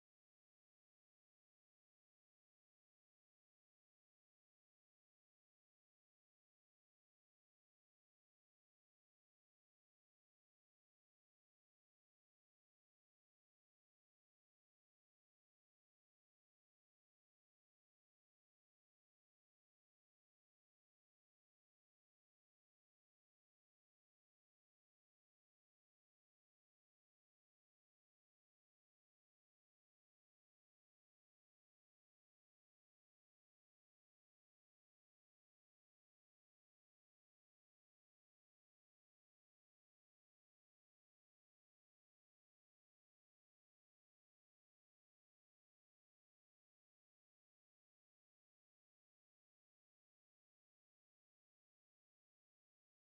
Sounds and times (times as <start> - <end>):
Silence: 0.0 - 53.0.